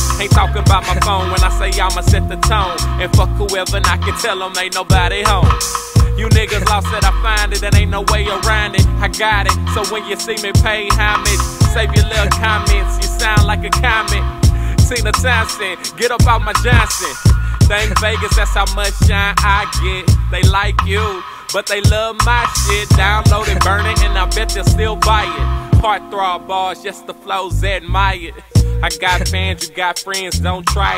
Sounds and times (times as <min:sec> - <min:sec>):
Music: 0:00.0 - 0:30.9.